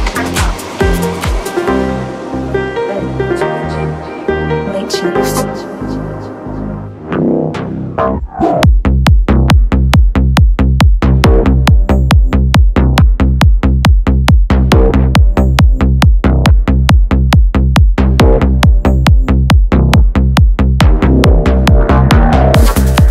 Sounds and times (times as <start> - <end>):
Music: 0.0 - 23.1
Speech: 4.6 - 6.1.